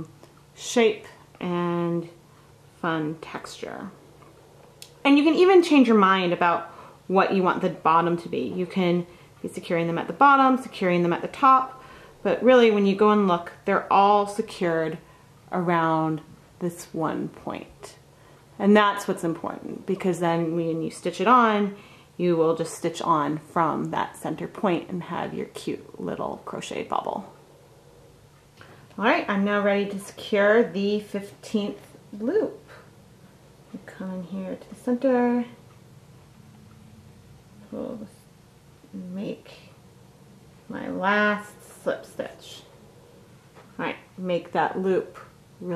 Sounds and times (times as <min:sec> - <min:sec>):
Speech: 0:00.0 - 0:02.2, 0:02.8 - 0:04.0, 0:05.0 - 0:18.0, 0:18.6 - 0:27.4, 0:29.0 - 0:32.9, 0:33.7 - 0:35.6, 0:37.7 - 0:38.2, 0:38.9 - 0:39.7, 0:40.7 - 0:42.7, 0:43.8 - 0:45.7.